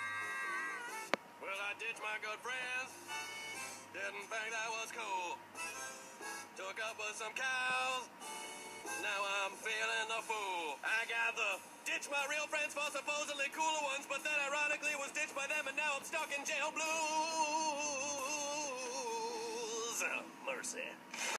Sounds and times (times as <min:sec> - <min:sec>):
Speech: 0:19.9 - 0:21.0.